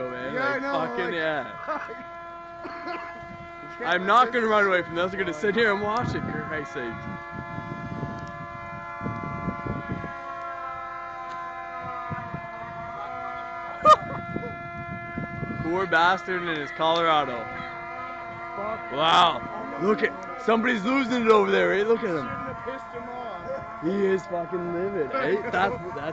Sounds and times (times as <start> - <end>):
Fire engine, fire truck (siren): 0.0 - 26.1.